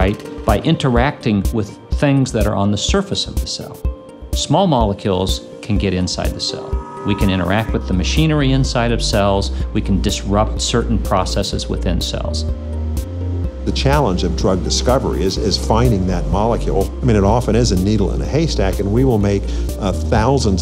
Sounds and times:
Speech: 0:00.0 - 0:12.5, 0:13.6 - 0:20.6
Music: 0:00.0 - 0:20.6.

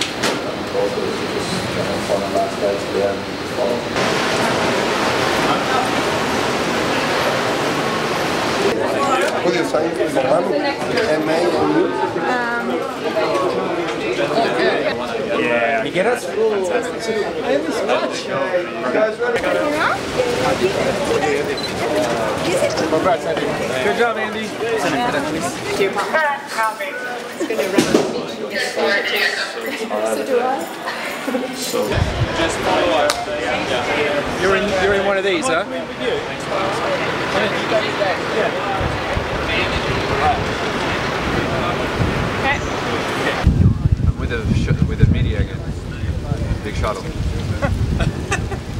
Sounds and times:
Ocean: 0:03.3 - 0:11.2, 0:32.0 - 0:44.4, 0:45.6 - 0:48.7.

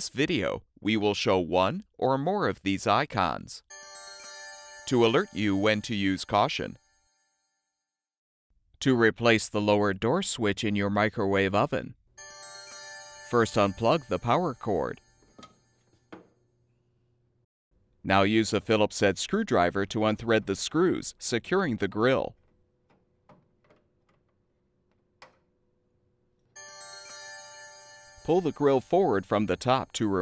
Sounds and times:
Speech: 0:00.0 - 0:03.7, 0:04.9 - 0:06.8, 0:08.8 - 0:12.0, 0:13.3 - 0:15.0, 0:18.1 - 0:22.4, 0:28.3 - 0:30.2
Music: 0:03.7 - 0:07.8, 0:12.2 - 0:15.8, 0:26.6 - 0:29.9.

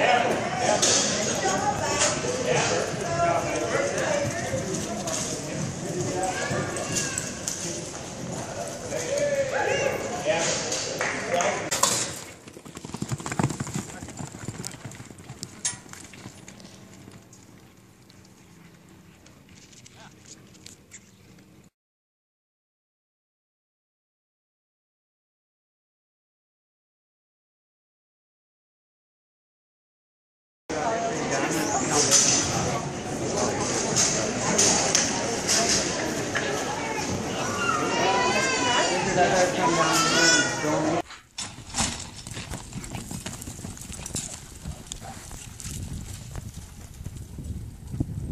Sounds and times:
Clip-clop: 0:00.7 - 0:21.7, 0:41.1 - 0:48.3.

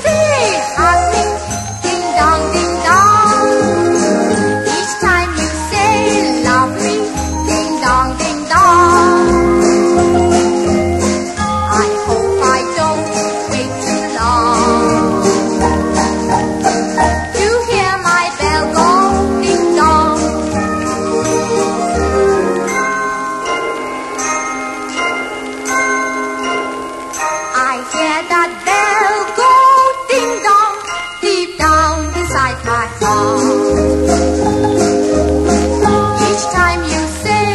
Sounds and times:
Jingle, tinkle: 0:00.0 - 0:37.5.

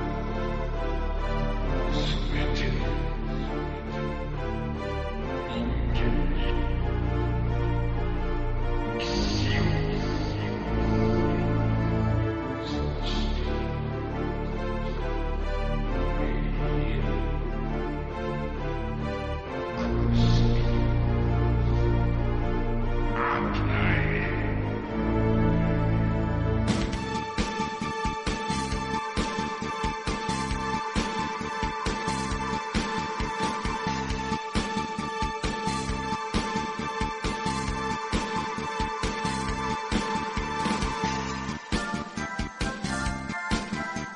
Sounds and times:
Music: 0:00.0 - 0:44.1.

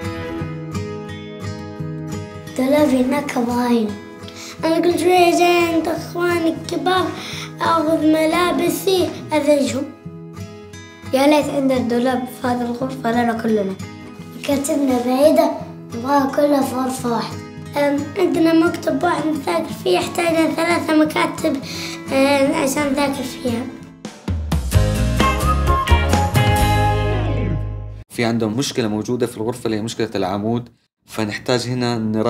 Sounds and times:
Child speech, kid speaking: 0:02.5 - 0:10.0, 0:11.1 - 0:23.8
Music for children: 0:04.3 - 0:04.8, 0:21.6 - 0:22.0, 0:24.1 - 0:28.0.

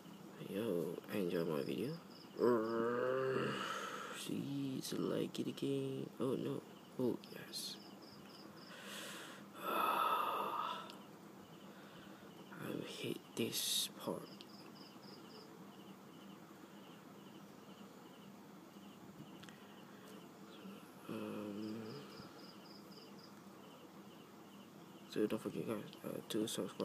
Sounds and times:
Inside, small room: 0:00.0 - 0:26.8
Speech: 0:00.4 - 0:03.3, 0:04.2 - 0:07.8, 0:12.6 - 0:14.4, 0:25.1 - 0:26.8.

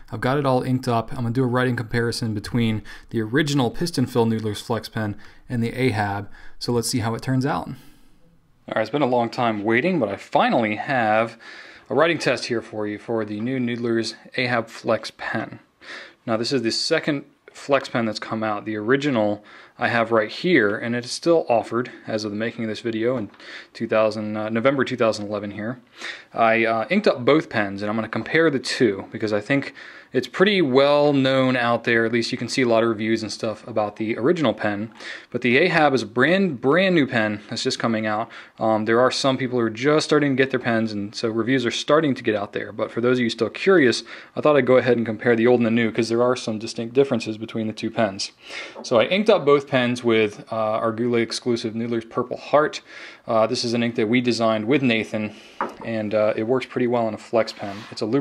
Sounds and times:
Speech: 0:00.0 - 0:07.9, 0:08.7 - 0:58.2.

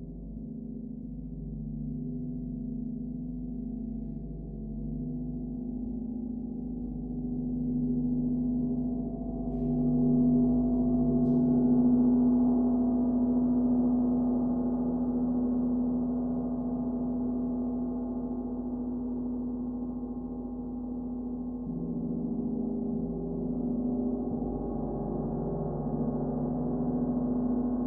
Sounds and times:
Gong: 0:00.0 - 0:27.8.

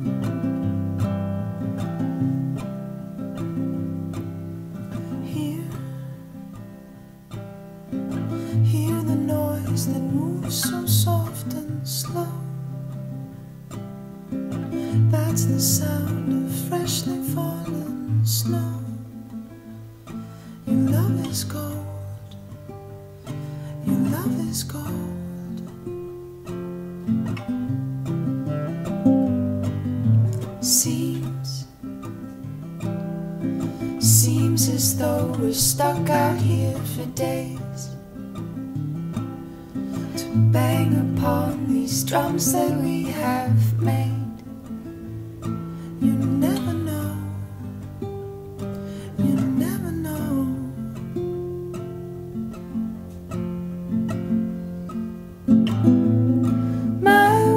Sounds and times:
Music: 0:00.0 - 0:57.5.

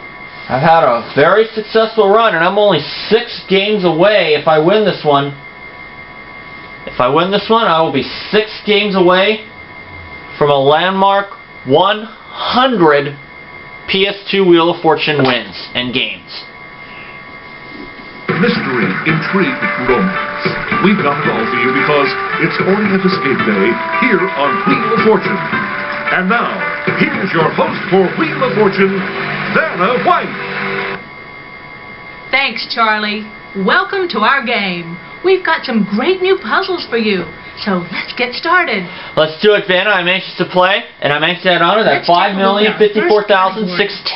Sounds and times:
Speech: 0:00.5 - 0:05.4, 0:06.9 - 0:09.5, 0:10.4 - 0:13.2, 0:13.9 - 0:16.5, 0:18.3 - 0:25.4, 0:26.1 - 0:29.0, 0:29.6 - 0:30.3, 0:32.4 - 0:44.1.

